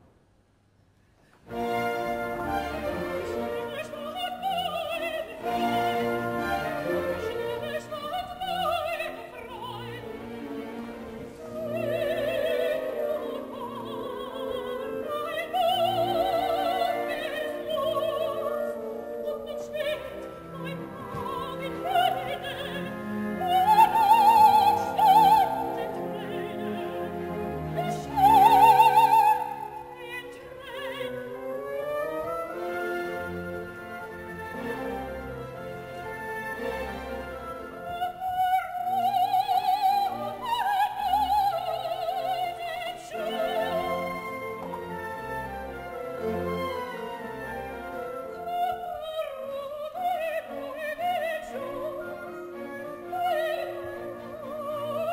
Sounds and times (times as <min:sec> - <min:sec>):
Opera: 0:01.3 - 0:55.1.